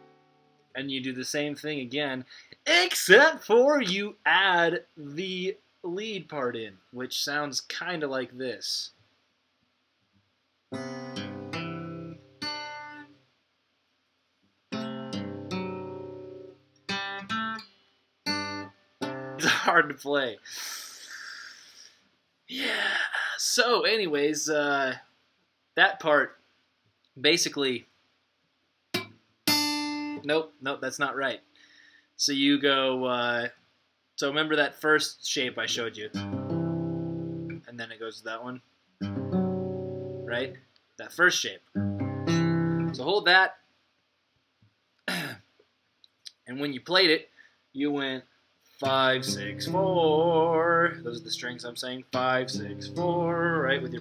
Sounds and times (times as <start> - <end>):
Acoustic guitar: 0.0 - 0.6, 10.7 - 13.2, 14.7 - 19.8, 29.0 - 30.3, 36.1 - 37.6, 39.0 - 40.6, 41.8 - 43.0, 48.8 - 54.0
Speech: 0.8 - 9.0, 19.4 - 20.7, 22.5 - 25.1, 25.8 - 26.4, 27.2 - 27.9, 30.2 - 31.4, 32.2 - 33.6, 34.2 - 36.2, 37.6 - 38.6, 40.3 - 41.7, 43.0 - 43.6, 46.3 - 54.0.